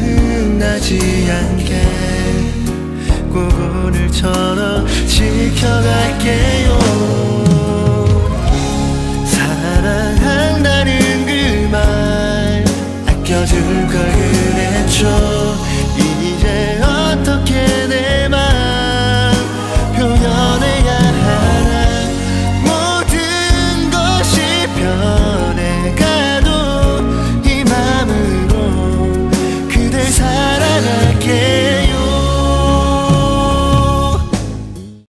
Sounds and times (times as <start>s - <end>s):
Music: 0.0s - 35.0s.